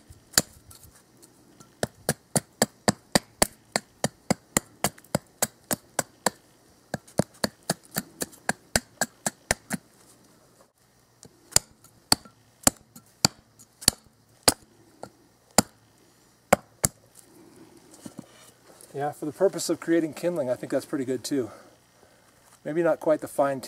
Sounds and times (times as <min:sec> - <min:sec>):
Outside, rural or natural: 0:00.0 - 0:23.6.